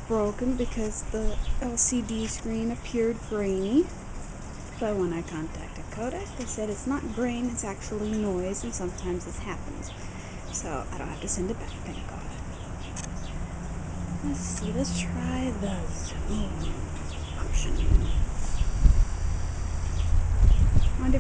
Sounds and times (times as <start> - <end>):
Speech: 0.1 - 3.9, 4.8 - 10.0, 10.6 - 12.4, 14.2 - 18.2, 21.0 - 21.2.